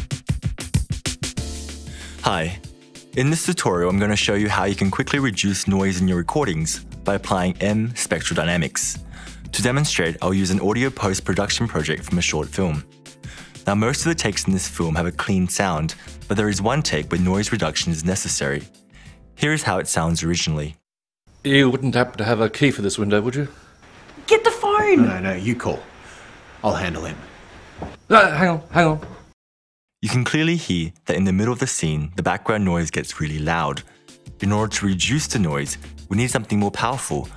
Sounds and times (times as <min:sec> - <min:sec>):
Speech: 0:02.2 - 0:02.6, 0:03.2 - 0:12.8, 0:13.6 - 0:18.7, 0:19.4 - 0:20.8, 0:21.4 - 0:23.5, 0:24.2 - 0:25.9, 0:26.6 - 0:27.2, 0:30.0 - 0:37.3.